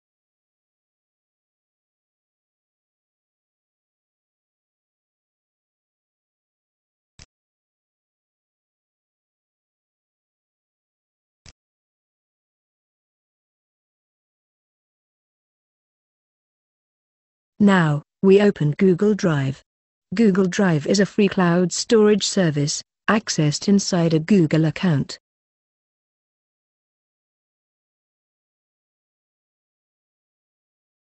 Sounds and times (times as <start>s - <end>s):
Speech: 17.6s - 19.6s, 20.2s - 25.2s.